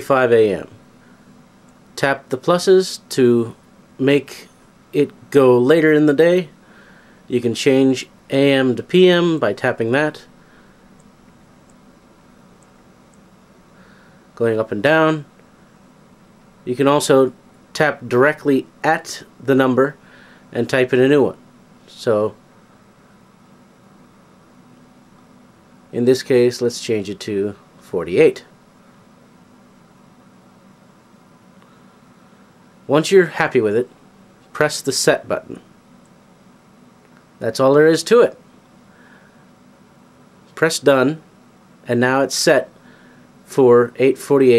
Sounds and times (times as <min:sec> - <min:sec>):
Speech: 0:00.0 - 0:00.8, 0:02.0 - 0:06.6, 0:07.3 - 0:10.3, 0:14.4 - 0:15.3, 0:16.6 - 0:22.4, 0:25.9 - 0:28.6, 0:32.9 - 0:34.0, 0:34.6 - 0:35.7, 0:37.4 - 0:38.4, 0:40.6 - 0:42.8, 0:43.5 - 0:44.5.